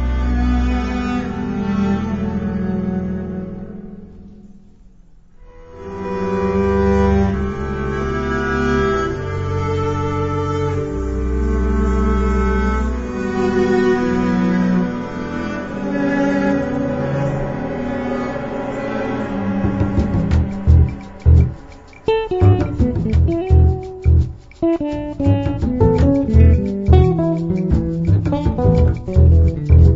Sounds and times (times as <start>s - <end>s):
Cello: 0.0s - 29.9s
Guitar: 5.7s - 29.9s.